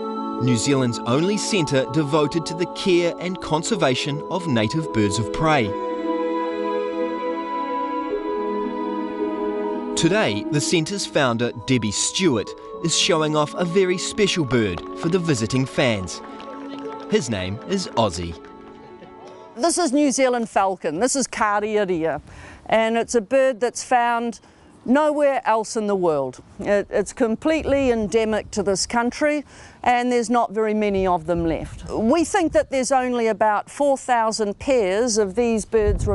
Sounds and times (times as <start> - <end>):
Music: 0.0 - 19.9
Speech: 0.4 - 5.8, 10.0 - 16.2, 17.1 - 18.4, 19.6 - 36.1.